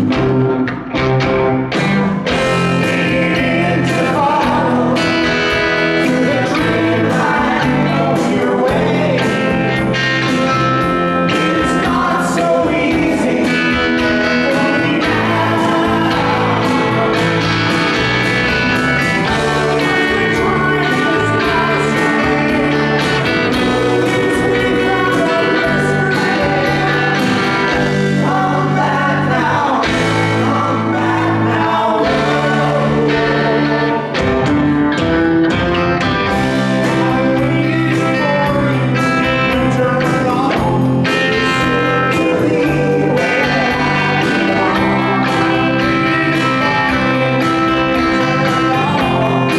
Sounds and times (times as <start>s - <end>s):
Music: 0.0s - 49.5s
Singing: 2.3s - 18.1s, 18.8s - 34.3s, 36.3s - 49.5s.